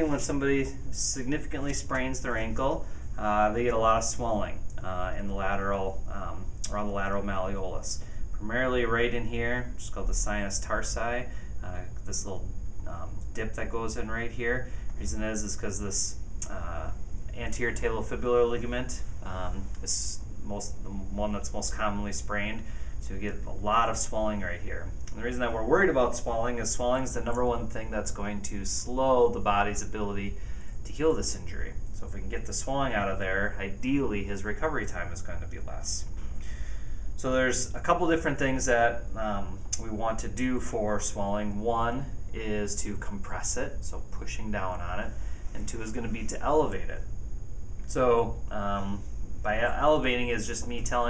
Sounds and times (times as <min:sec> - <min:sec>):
Speech: 0:00.0 - 0:36.1, 0:37.2 - 0:47.1, 0:47.9 - 0:51.1.